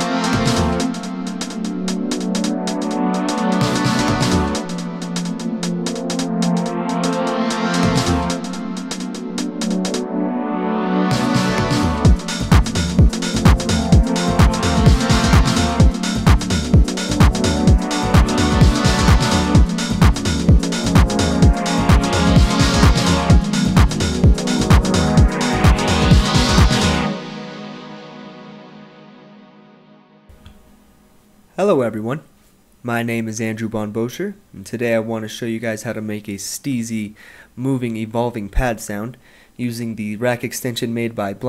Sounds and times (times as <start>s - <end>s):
Music: 0.0s - 31.6s
Speech: 31.6s - 41.4s.